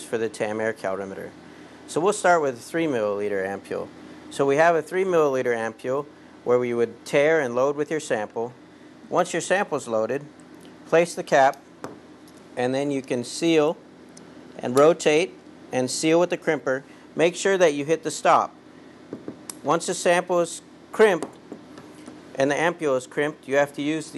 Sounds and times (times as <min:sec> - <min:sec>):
Speech: 0:00.0 - 0:10.3, 0:10.9 - 0:11.6, 0:12.6 - 0:13.8, 0:14.6 - 0:18.6, 0:19.6 - 0:21.3, 0:22.4 - 0:24.1.